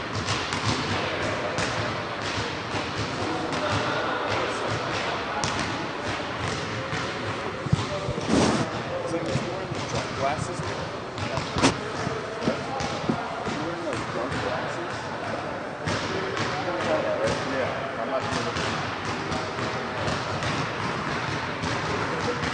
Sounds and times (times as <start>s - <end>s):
Speech: 0.9s - 20.5s.